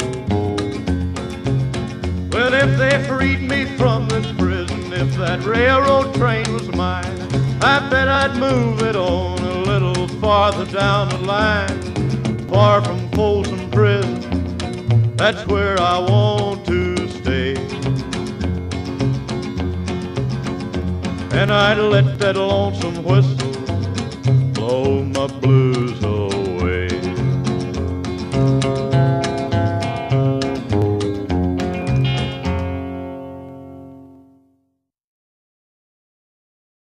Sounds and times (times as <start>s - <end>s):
Plucked string instrument: 0.0s - 34.4s.